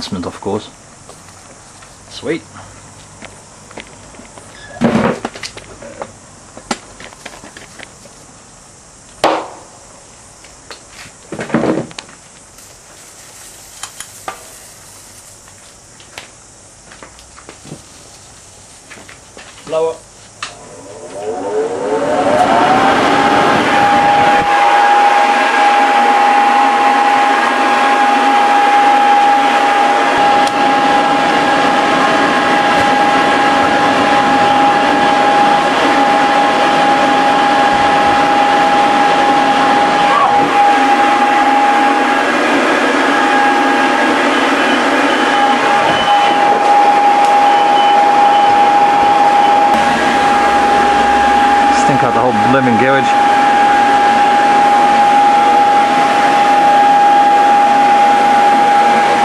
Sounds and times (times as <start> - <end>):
Fire: 0.0 - 59.2.